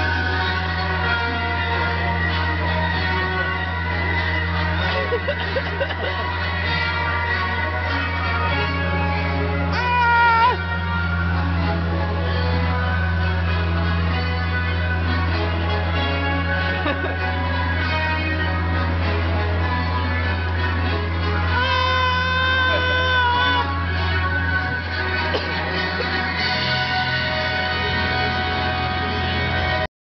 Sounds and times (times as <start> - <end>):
Music: 0.0 - 29.9.